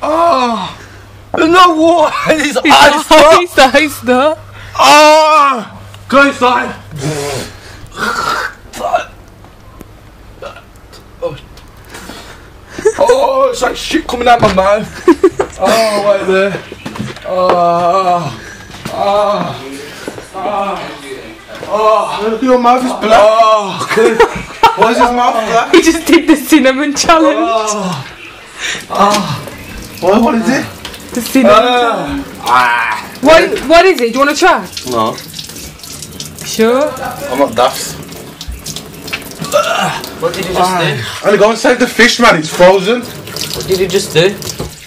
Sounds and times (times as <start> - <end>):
Sink (filling or washing): 28.8 - 44.8
Water tap, faucet: 28.8 - 44.8.